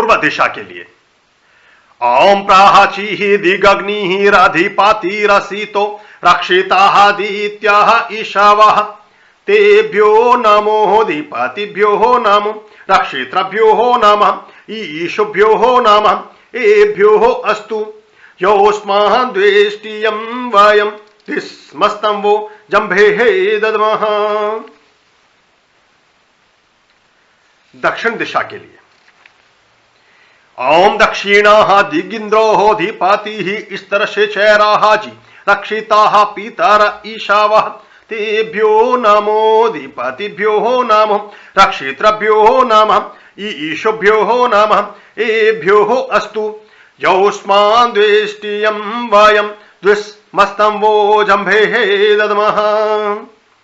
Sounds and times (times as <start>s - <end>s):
Mantra: 0.0s - 1.0s, 2.0s - 24.8s, 30.6s - 53.4s
Speech: 0.0s - 1.0s, 27.8s - 28.9s.